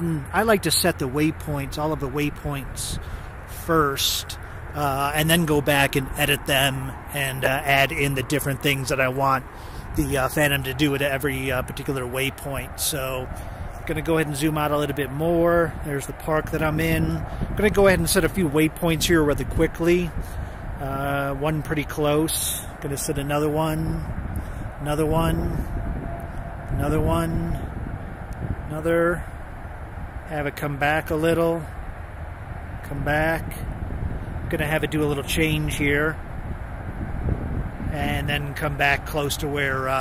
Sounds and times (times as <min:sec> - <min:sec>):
Wind noise (microphone): 0:00.0 - 0:40.0.